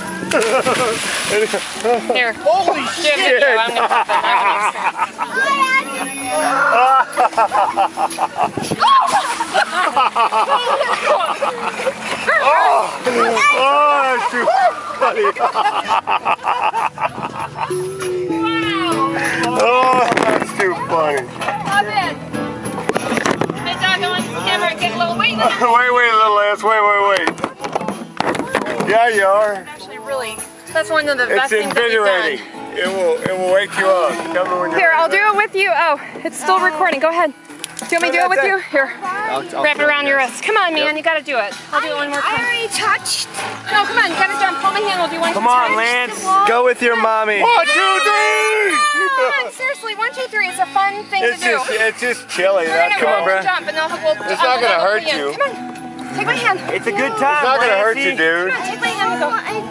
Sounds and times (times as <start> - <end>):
Music: 0.0 - 59.7.